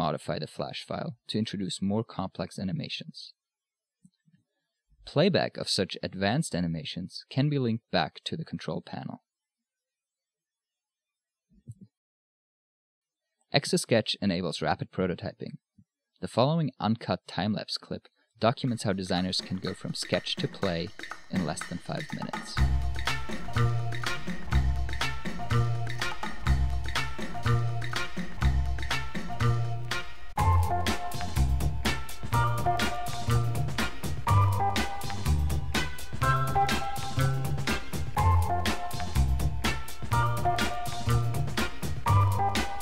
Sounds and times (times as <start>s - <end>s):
Speech: 0.0s - 3.4s, 5.0s - 9.2s, 13.6s - 15.6s, 16.2s - 22.6s.